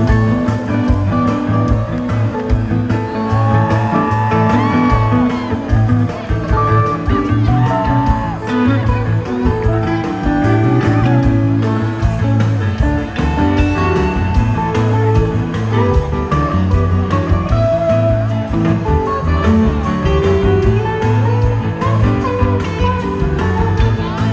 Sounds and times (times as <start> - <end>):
Music: 0.0 - 24.3.